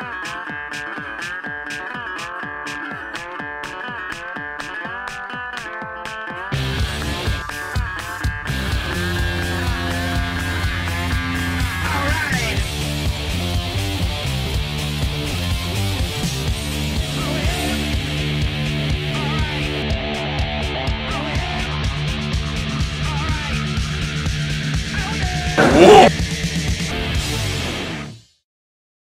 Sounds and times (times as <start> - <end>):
Music: 0.0 - 28.4.